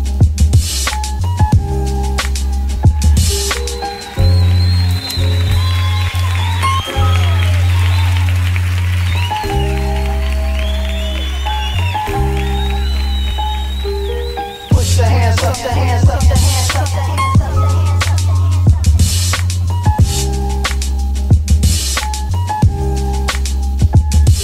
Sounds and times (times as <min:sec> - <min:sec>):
Hip hop music: 0:00.0 - 0:24.4.